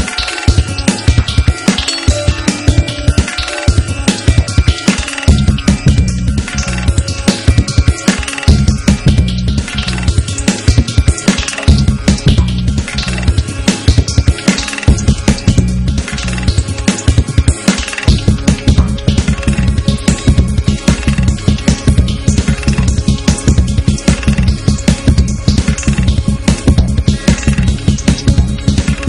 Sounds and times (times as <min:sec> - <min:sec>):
Music: 0:00.0 - 0:29.0.